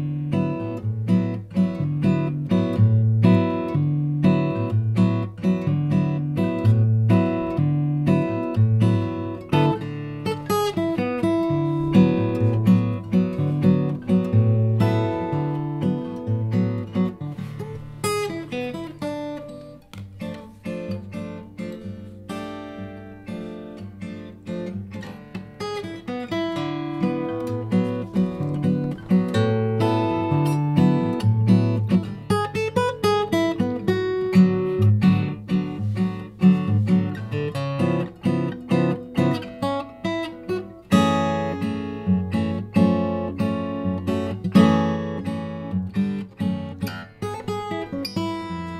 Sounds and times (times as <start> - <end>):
Acoustic guitar: 0.0 - 48.7
Strum: 0.4 - 48.7.